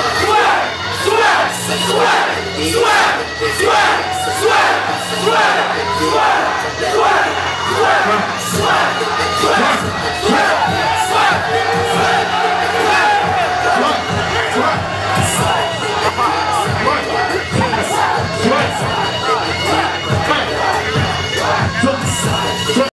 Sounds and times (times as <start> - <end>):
Music: 0.0 - 22.9.